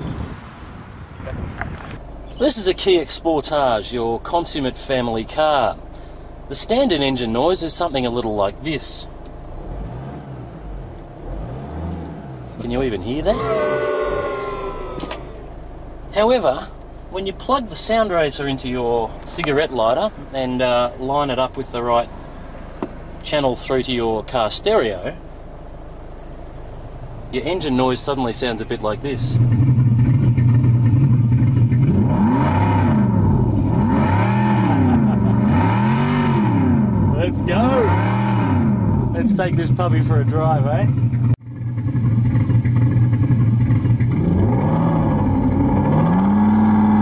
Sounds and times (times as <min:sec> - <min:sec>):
Engine: 0:01.2 - 0:47.0
Speech: 0:02.4 - 0:05.8, 0:06.5 - 0:09.1, 0:12.6 - 0:13.6, 0:16.1 - 0:22.1, 0:23.2 - 0:25.2, 0:27.3 - 0:29.4, 0:37.1 - 0:38.0, 0:39.2 - 0:41.0
Race car, auto racing: 0:07.8 - 0:15.6, 0:28.5 - 0:47.0.